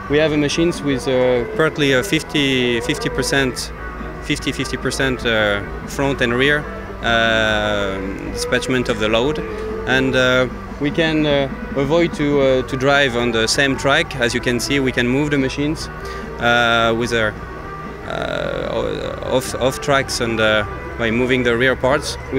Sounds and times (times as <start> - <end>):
Music: 0.0 - 22.3
Speech: 0.1 - 3.7, 4.3 - 17.3, 18.1 - 22.3.